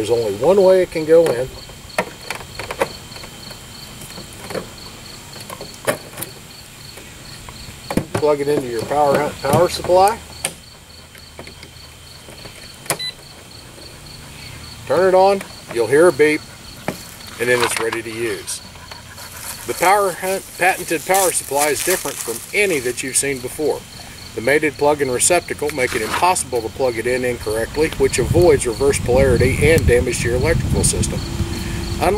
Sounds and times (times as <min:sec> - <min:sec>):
Speech: 0:00.0 - 0:01.6, 0:08.2 - 0:10.2, 0:14.9 - 0:16.4, 0:17.4 - 0:18.6, 0:19.7 - 0:23.8, 0:24.4 - 0:31.2.